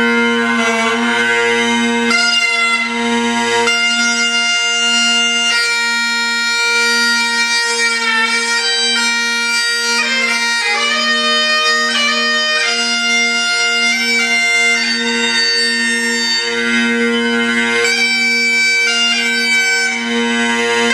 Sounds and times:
Bagpipes: 0.0 - 20.9.

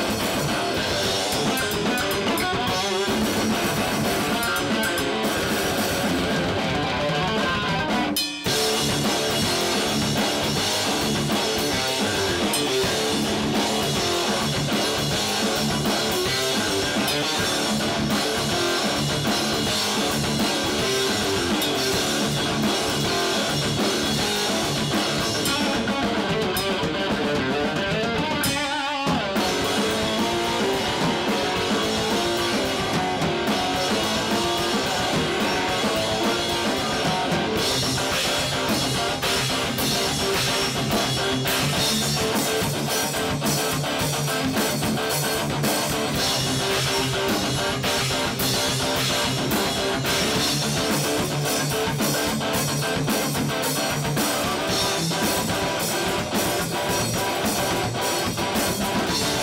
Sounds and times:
Bass drum: 0.0 - 28.6, 29.2 - 59.4
Drum kit: 0.0 - 59.4
Drum roll: 0.0 - 59.4.

